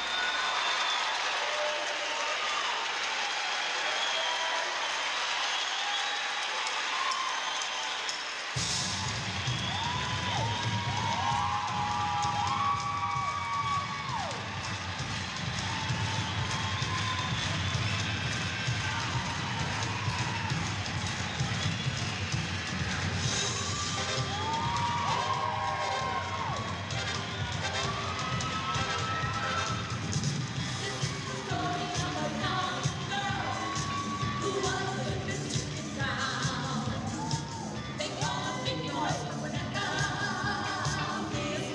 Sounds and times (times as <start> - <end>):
Music: 6.4 - 41.7.